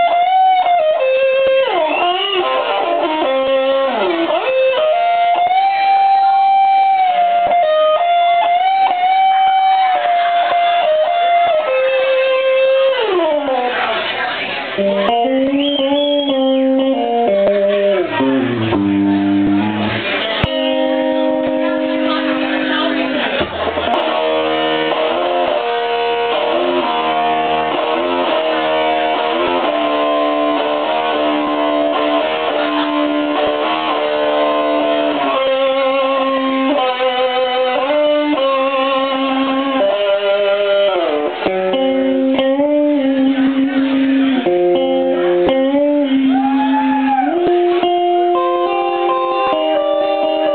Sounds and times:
Inside, large room or hall: 0.0s - 50.5s
Music: 0.0s - 50.5s.

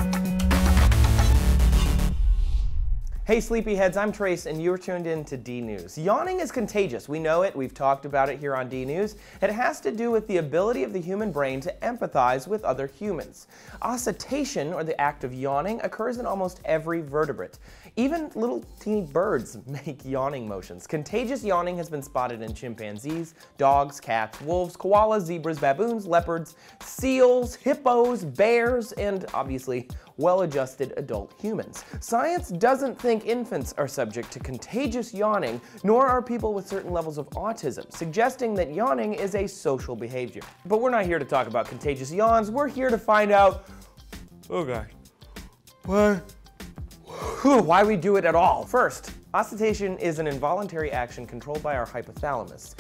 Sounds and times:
Music: 0.0s - 52.8s
Speech: 3.2s - 43.6s, 44.5s - 44.9s, 45.9s - 46.3s, 47.3s - 52.8s.

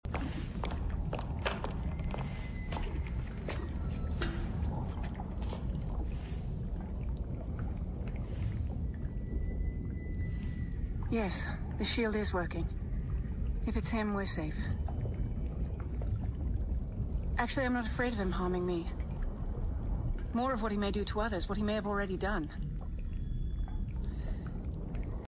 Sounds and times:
Speech: 11.1s - 12.7s, 13.7s - 14.8s, 17.4s - 19.0s, 20.4s - 22.6s.

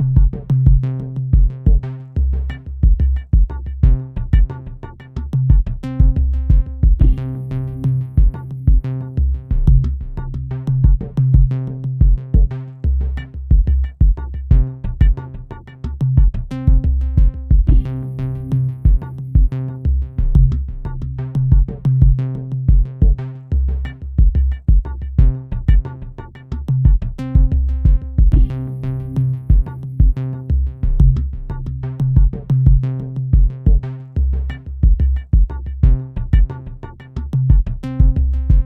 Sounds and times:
Drum machine: 0.0s - 38.6s.

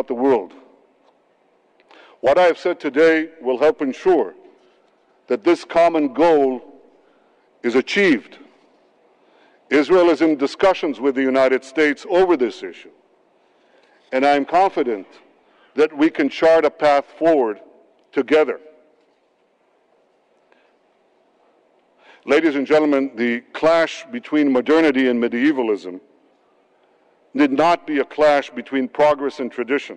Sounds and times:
Male speech, man speaking: 0.0s - 0.6s, 2.2s - 4.4s, 5.3s - 6.7s, 7.6s - 8.4s, 9.7s - 12.9s, 14.1s - 15.2s, 15.8s - 18.7s, 22.3s - 26.0s, 27.4s - 29.9s.

